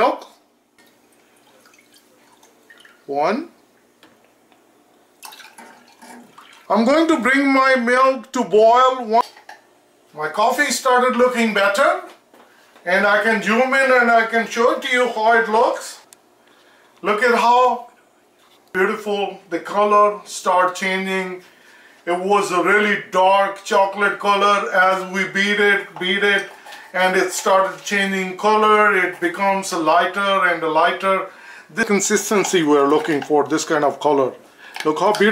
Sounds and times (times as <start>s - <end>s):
Speech: 0.0s - 0.4s, 3.1s - 3.6s, 6.7s - 9.3s, 10.1s - 12.2s, 12.8s - 16.1s, 17.0s - 18.0s, 18.7s - 21.5s, 22.1s - 35.3s
Inside, small room: 0.0s - 35.3s.